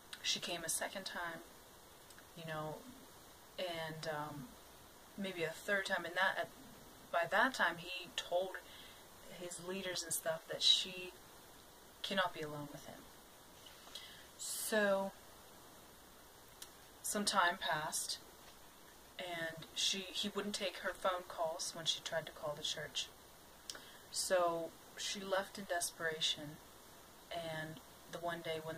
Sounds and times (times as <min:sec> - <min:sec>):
Inside, small room: 0:00.0 - 0:28.7
Speech: 0:00.2 - 0:01.4, 0:02.3 - 0:02.8, 0:03.6 - 0:04.5, 0:05.2 - 0:06.5, 0:07.1 - 0:08.7, 0:09.3 - 0:11.2, 0:12.0 - 0:13.0, 0:14.4 - 0:15.2, 0:17.0 - 0:18.2, 0:19.2 - 0:23.2, 0:24.1 - 0:26.6, 0:27.3 - 0:28.7.